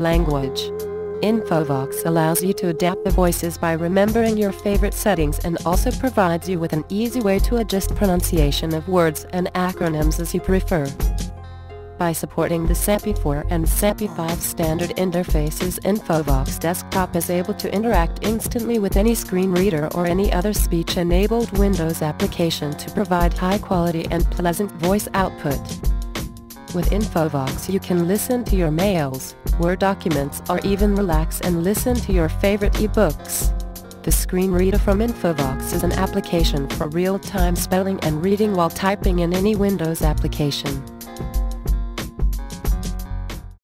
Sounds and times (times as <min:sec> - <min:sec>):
Music: 0:00.0 - 0:43.6
Speech synthesizer: 0:29.7 - 0:33.4, 0:34.4 - 0:36.6.